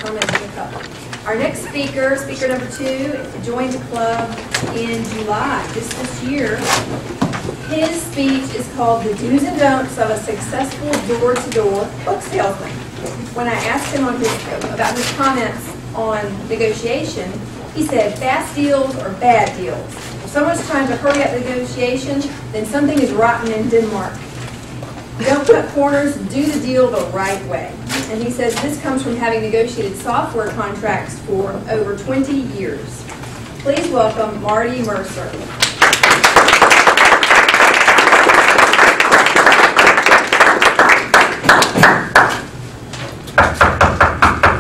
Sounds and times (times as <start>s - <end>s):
Speech: 0.0s - 6.8s, 7.7s - 24.2s, 25.2s - 33.0s, 33.6s - 35.5s.